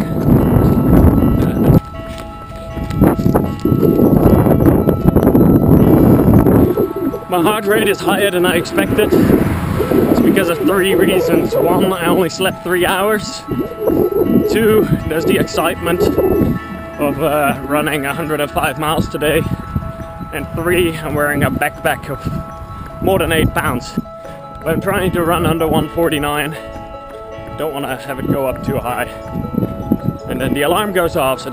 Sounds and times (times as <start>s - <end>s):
Run: 0.0s - 5.9s, 21.6s - 30.2s
Music: 0.0s - 31.5s.